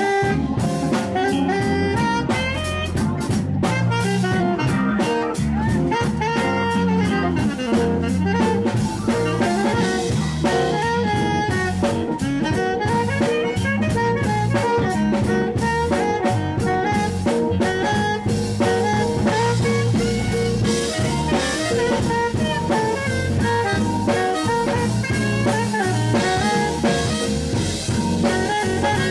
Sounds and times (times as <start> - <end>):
Brass instrument: 0.0 - 29.1
Drum: 0.0 - 29.1
Guitar: 0.0 - 29.1
Jazz: 0.0 - 29.1
Saxophone: 0.0 - 29.1.